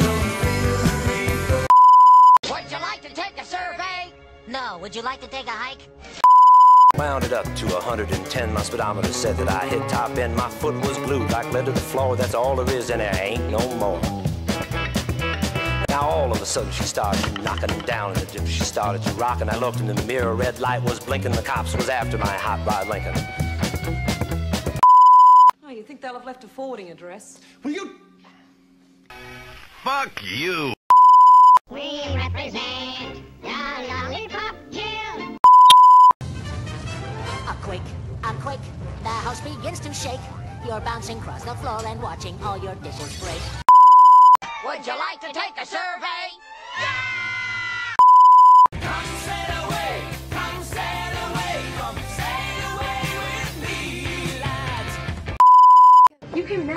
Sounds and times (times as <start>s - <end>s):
Music: 0.0s - 1.7s, 2.4s - 6.2s, 7.0s - 24.8s, 31.7s - 35.4s, 36.2s - 38.1s, 39.0s - 43.4s, 48.8s - 55.4s
Speech: 7.0s - 14.0s, 15.9s - 23.2s.